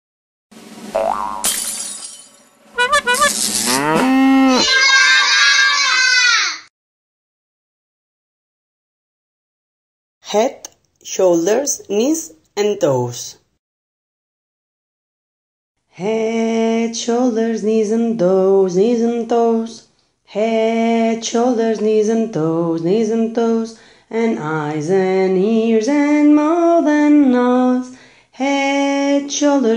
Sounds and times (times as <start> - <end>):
Music: 2.8 - 3.6
Child speech, kid speaking: 4.5 - 6.6.